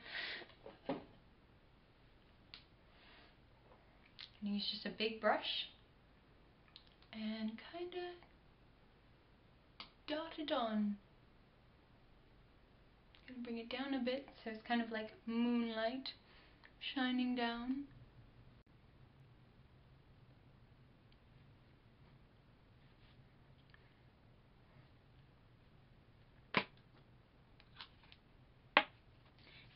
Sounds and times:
Silence: 8.3s - 9.8s, 17.9s - 29.7s.

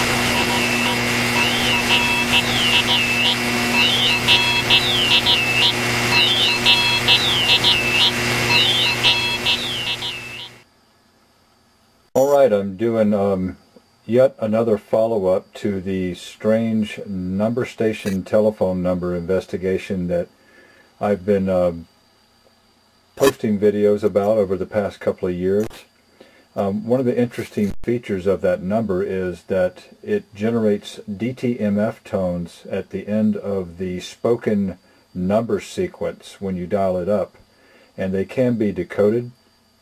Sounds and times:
Speech: 12.2s - 20.3s, 21.0s - 21.9s, 23.2s - 25.9s, 26.6s - 37.4s, 38.0s - 39.4s.

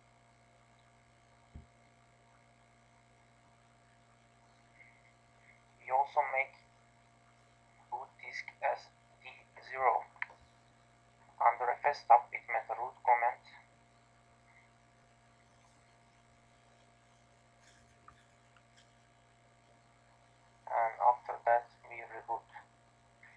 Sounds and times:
Speech: 5.8s - 6.6s, 7.9s - 10.4s, 11.4s - 13.7s, 20.7s - 22.6s.

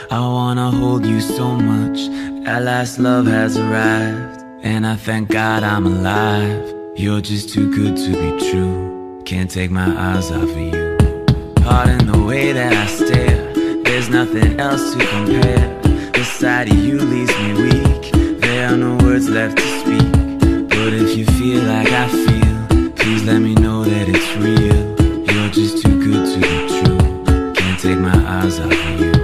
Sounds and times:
Music: 0.0s - 29.2s.

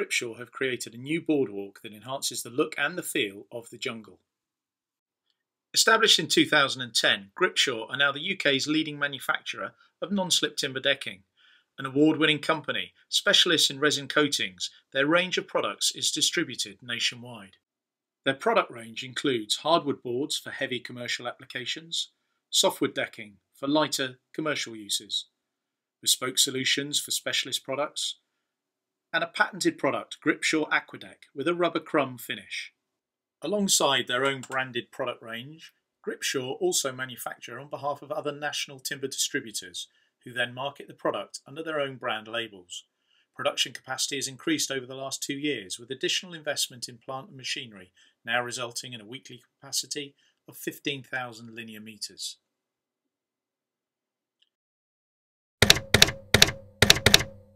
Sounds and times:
Speech: 0.0s - 4.2s, 5.8s - 17.6s, 18.3s - 25.3s, 26.0s - 28.2s, 29.2s - 32.8s, 33.4s - 52.5s.

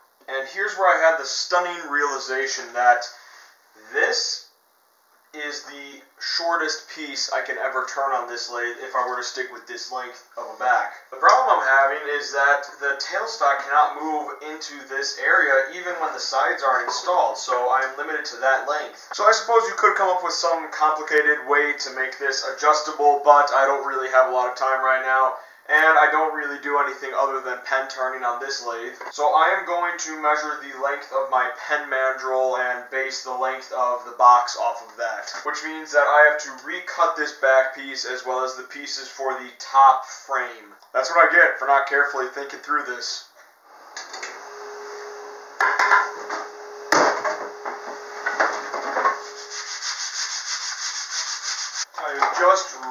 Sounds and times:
Rub: 49.2s - 51.9s
Sanding: 49.2s - 51.9s.

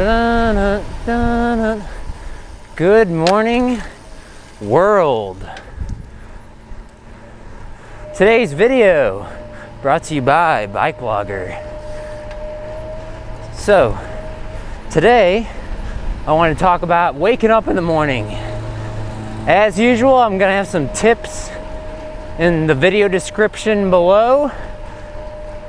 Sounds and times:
Bicycle: 0.0s - 25.6s
Speech: 4.6s - 5.6s, 8.2s - 11.6s, 13.6s - 14.0s, 16.3s - 18.4s, 19.5s - 21.6s, 22.4s - 24.5s.

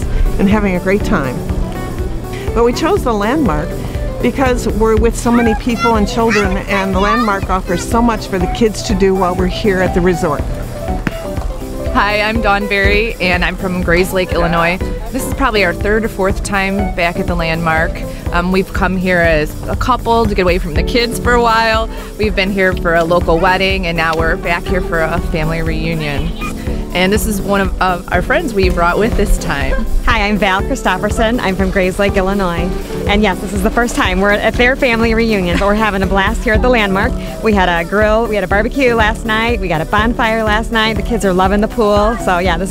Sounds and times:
Music: 0.0s - 42.7s
Speech: 4.3s - 10.4s, 12.0s - 26.3s, 27.0s - 42.7s.

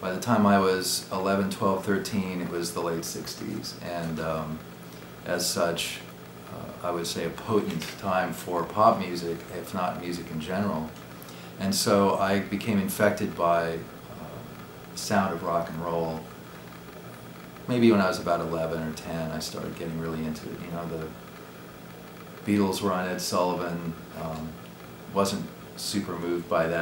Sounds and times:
Speech: 0.0s - 4.6s, 5.2s - 11.0s, 11.6s - 16.3s, 17.7s - 21.2s, 22.5s - 26.8s.

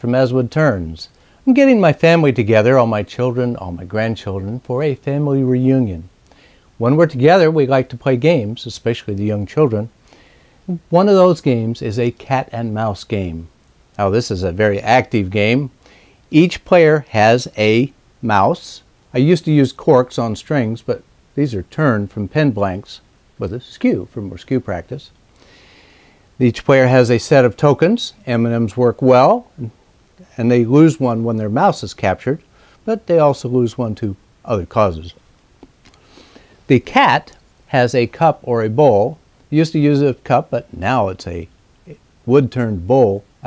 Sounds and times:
Speech: 0.0s - 6.1s, 6.8s - 10.0s, 10.7s - 25.2s, 26.4s - 35.2s, 36.7s - 43.4s.

